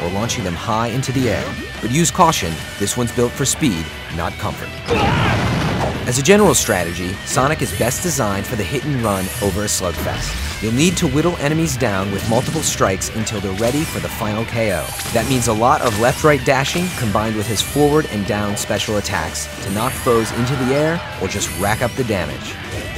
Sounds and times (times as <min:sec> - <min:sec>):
Speech: 0:00.0 - 0:05.3, 0:06.0 - 0:22.9
Music: 0:00.0 - 0:22.9.